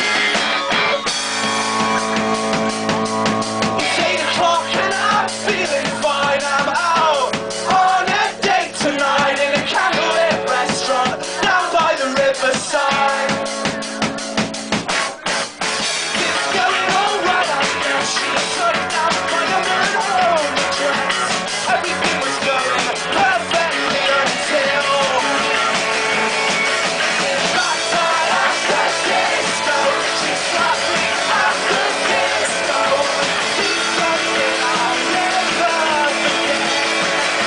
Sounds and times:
Disco: 0.0s - 37.4s.

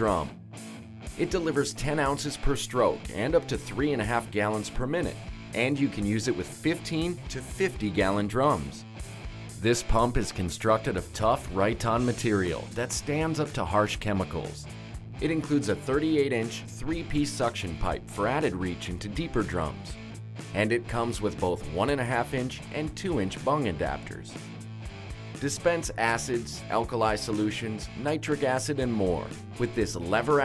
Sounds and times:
Speech: 0.0s - 0.4s, 1.2s - 8.8s, 9.6s - 19.9s, 20.5s - 24.4s, 25.4s - 30.4s.

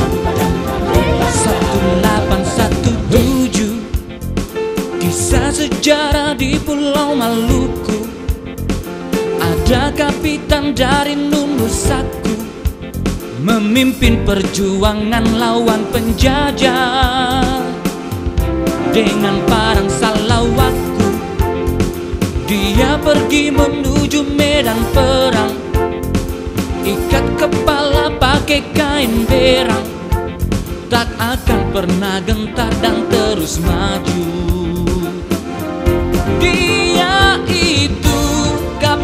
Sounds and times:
Music: 0.0s - 39.0s.

